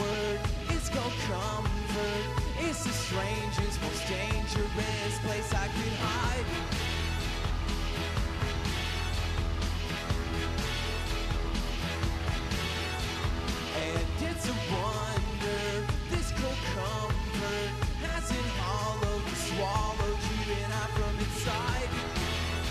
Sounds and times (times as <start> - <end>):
Music: 0.0 - 22.7.